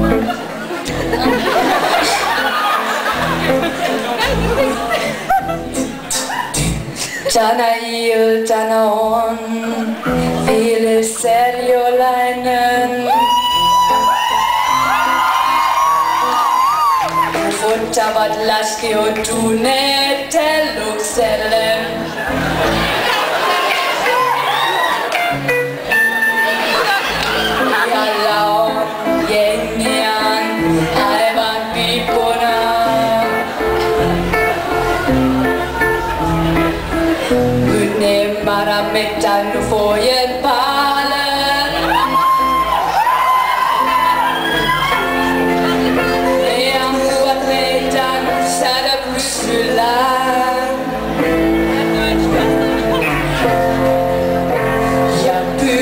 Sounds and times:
Music: 0.0 - 55.8
Female singing: 7.2 - 14.0, 17.4 - 22.2, 27.8 - 33.6, 37.6 - 42.2, 45.2 - 53.8, 54.9 - 55.8.

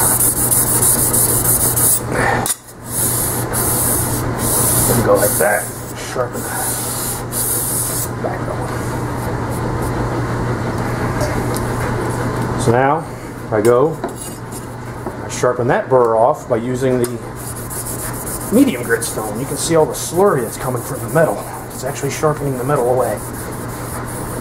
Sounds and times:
Filing (rasp): 0.0 - 2.0, 2.9 - 8.1, 17.4 - 24.4
Rub: 0.0 - 2.0, 2.9 - 8.1, 17.4 - 24.4.

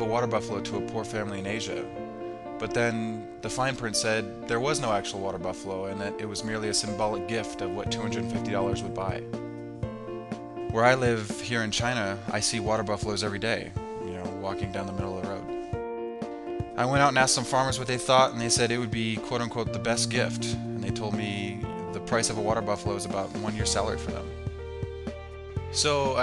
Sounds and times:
Speech: 0.0 - 1.9, 2.6 - 9.2, 10.7 - 15.5, 16.8 - 24.3, 25.8 - 26.2
Music: 0.0 - 26.2.

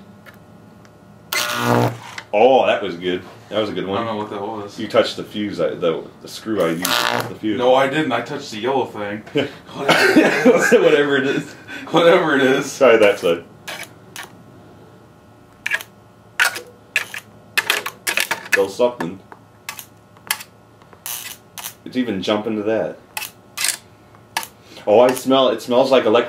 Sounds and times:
Speech: 2.3 - 9.9, 10.6 - 13.5, 18.5 - 19.2, 21.8 - 23.0, 24.8 - 26.2.

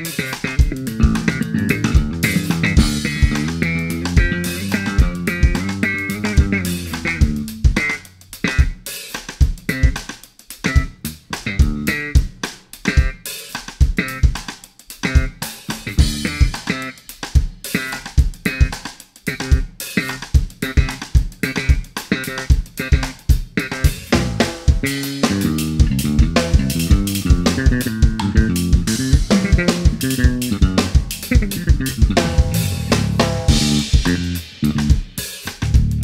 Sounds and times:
Funk: 0.0 - 36.0.

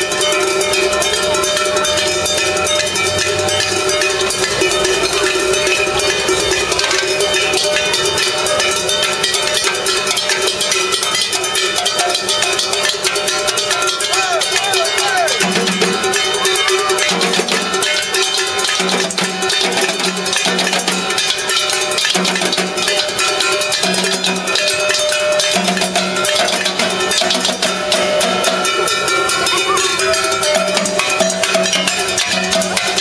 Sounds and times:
Percussion: 0.0 - 33.0
Speech: 0.4 - 7.0, 11.6 - 12.5, 13.5 - 17.4, 29.2 - 30.8.

